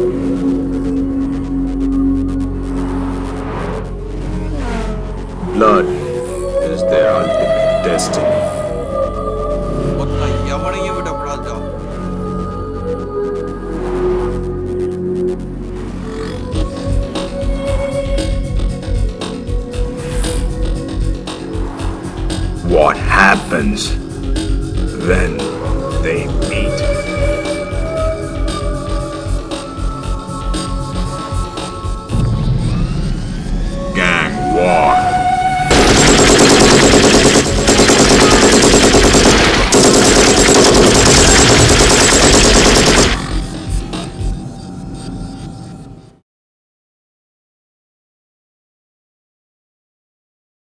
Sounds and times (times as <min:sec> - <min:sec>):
Machine gun: 0:35.7 - 0:43.5.